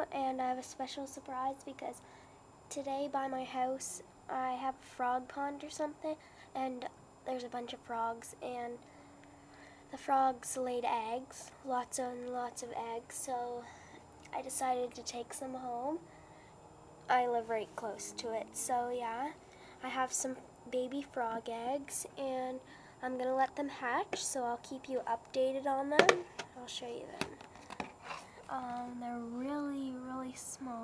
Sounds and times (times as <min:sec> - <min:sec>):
Speech: 0:00.0 - 0:02.0, 0:02.7 - 0:08.8, 0:09.9 - 0:13.7, 0:14.3 - 0:16.0, 0:17.1 - 0:27.4, 0:28.5 - 0:30.8.